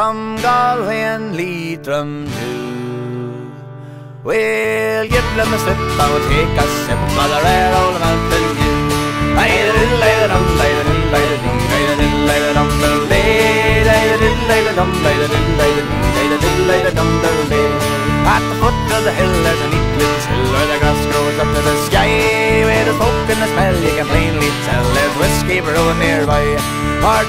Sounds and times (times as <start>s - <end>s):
Musical instrument: 5.1s - 27.2s.